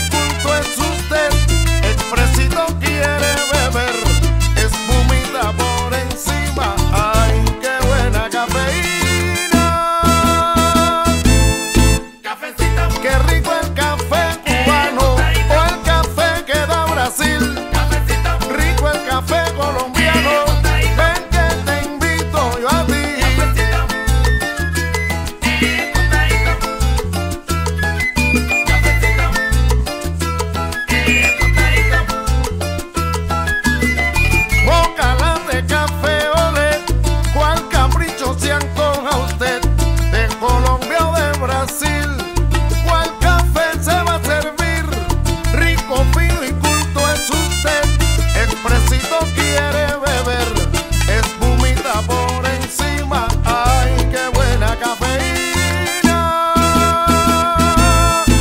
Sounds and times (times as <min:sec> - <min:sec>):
Salsa music: 0:00.0 - 0:58.4.